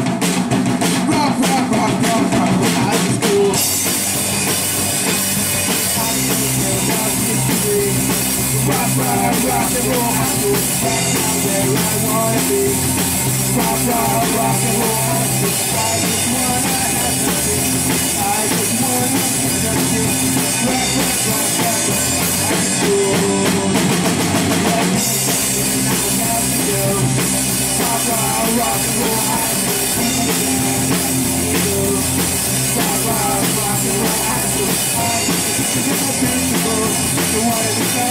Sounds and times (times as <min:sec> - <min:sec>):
Punk rock: 0:00.0 - 0:38.1.